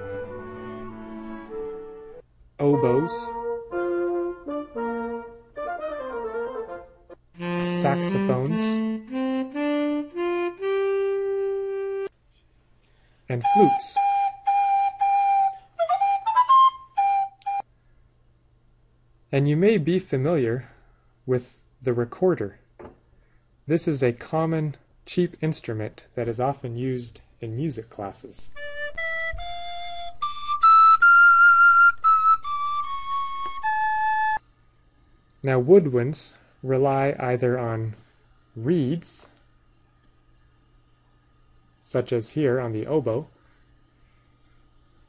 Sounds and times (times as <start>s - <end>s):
Speech: 2.6s - 3.4s, 7.6s - 8.9s, 13.3s - 14.1s, 19.3s - 22.6s, 23.7s - 28.6s, 35.4s - 38.0s, 38.6s - 39.4s, 41.8s - 43.4s.